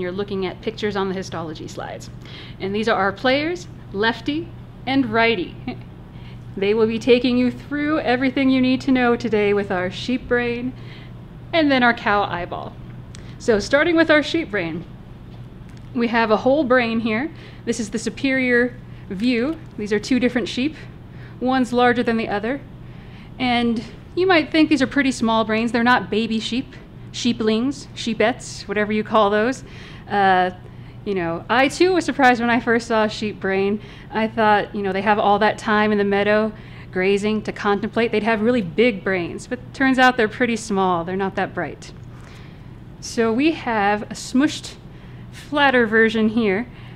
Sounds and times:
Speech: 0.0s - 5.8s, 6.6s - 10.8s, 11.5s - 12.8s, 13.4s - 14.9s, 15.9s - 22.7s, 23.4s - 42.0s, 43.0s - 44.8s, 45.4s - 46.7s.

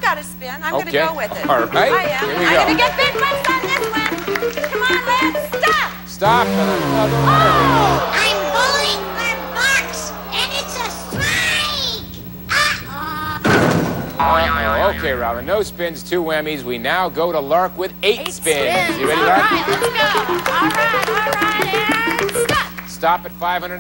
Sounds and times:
Screaming: 6.2s - 13.3s.

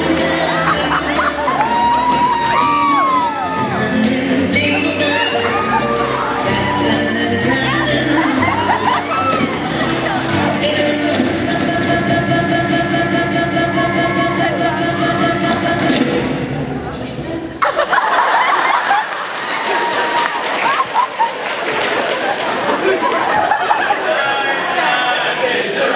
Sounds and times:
Music: 0.0s - 16.9s.

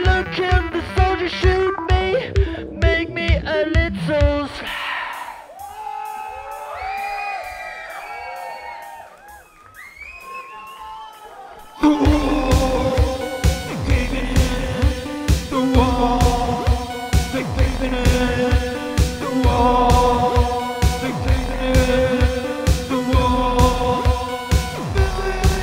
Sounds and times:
Music: 0.0s - 25.6s
Singing: 11.7s - 25.6s.

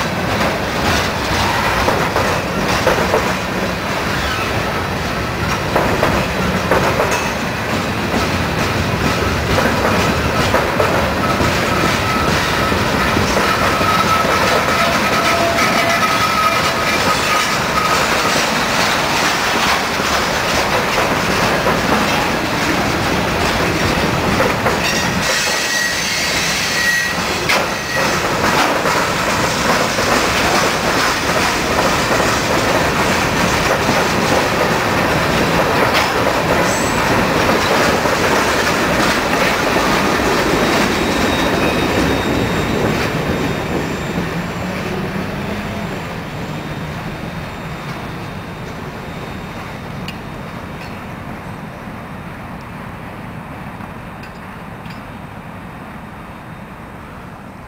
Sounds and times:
Railroad car, train wagon: 0.0s - 57.6s
Train: 0.0s - 57.6s.

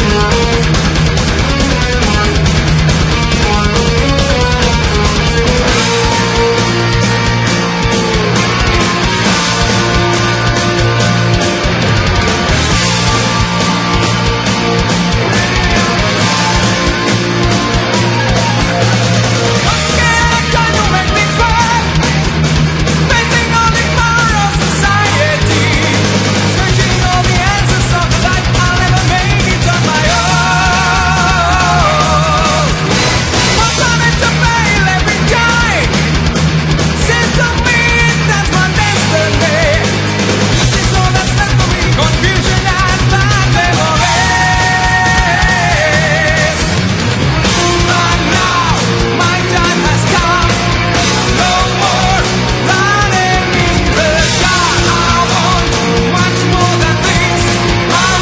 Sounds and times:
Music: 0.0s - 58.2s.

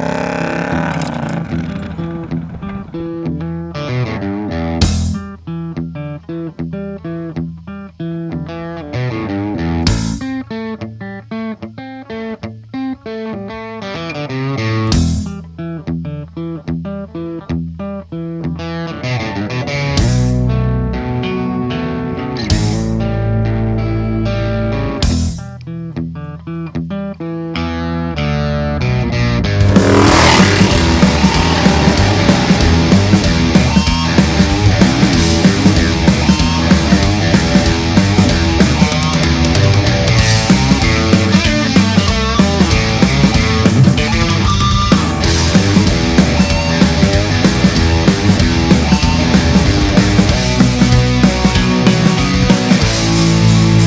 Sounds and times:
Reggae: 29.4s - 53.8s.

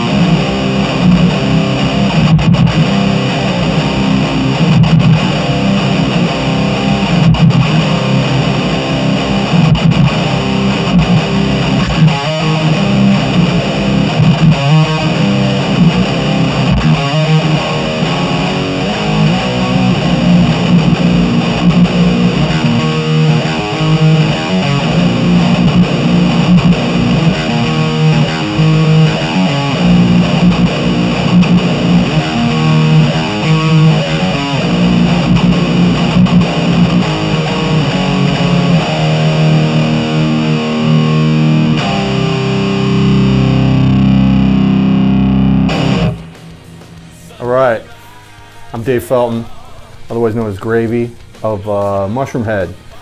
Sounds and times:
Electric guitar: 0.0s - 53.0s
Strum: 0.0s - 53.0s.

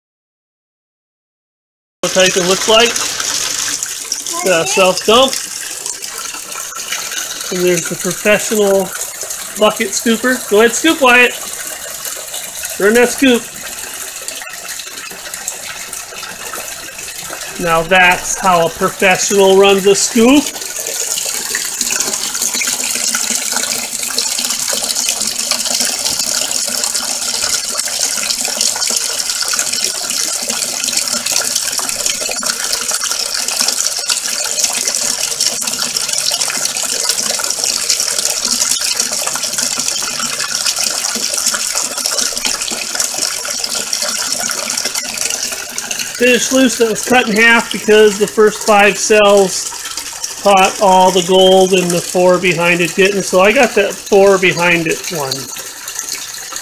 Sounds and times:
Gush: 2.1s - 56.6s.

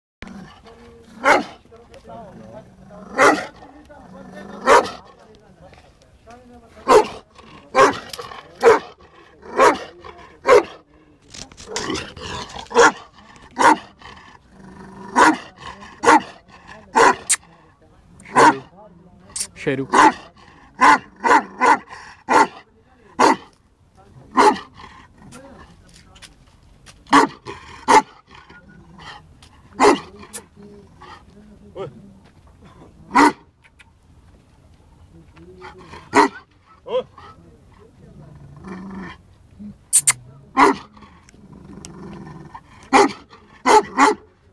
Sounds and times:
Speech: 0.3s - 33.5s, 34.8s - 44.5s.

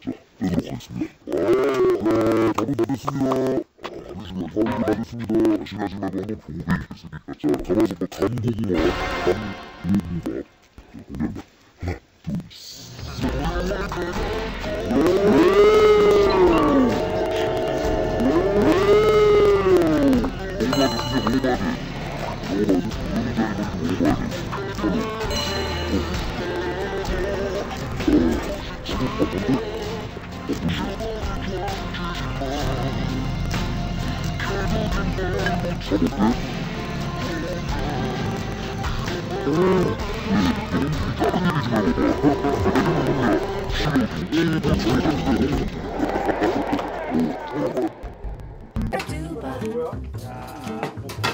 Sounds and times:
Speech: 0.0s - 17.5s, 18.2s - 21.8s, 22.4s - 33.3s, 34.2s - 47.9s, 48.9s - 51.3s
Music: 8.8s - 10.2s, 13.0s - 47.5s, 48.3s - 51.3s.

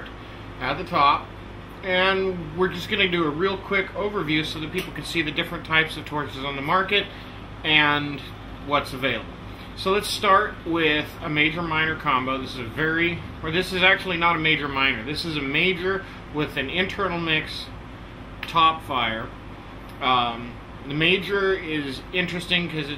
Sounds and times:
Speech: 0.0s - 17.8s, 18.4s - 19.4s, 20.0s - 22.9s.

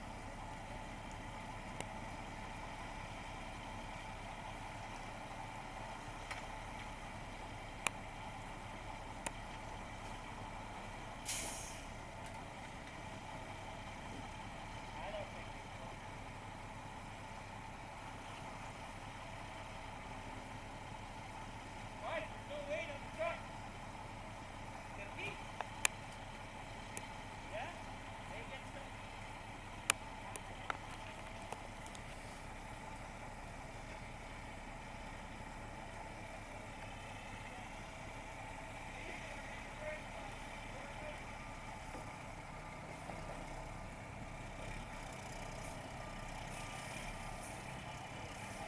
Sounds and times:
Speech: 14.9s - 16.0s, 22.0s - 23.5s, 24.9s - 25.5s, 27.5s - 29.0s, 38.9s - 41.3s.

